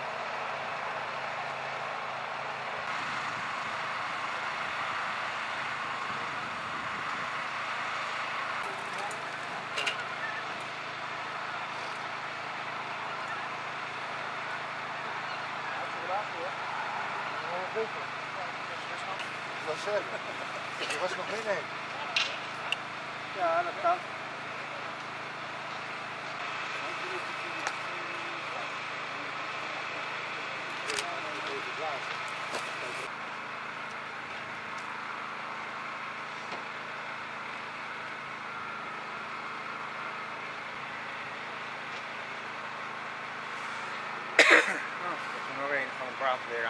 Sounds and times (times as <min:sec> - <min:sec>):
Vehicle: 0:00.0 - 0:46.7.